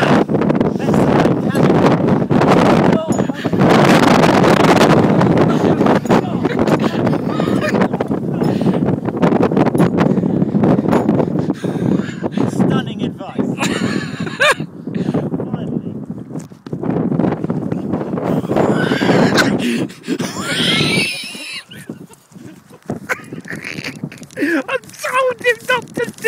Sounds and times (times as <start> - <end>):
Outside, rural or natural: 0.0 - 26.2
Speech: 25.0 - 26.2.